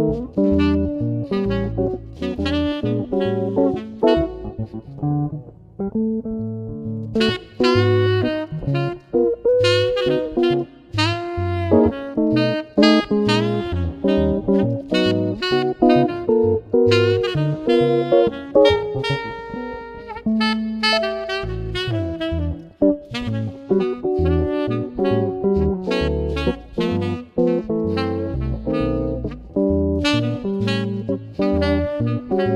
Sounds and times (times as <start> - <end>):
Guitar: 0.0 - 32.5
Jazz: 0.0 - 32.5.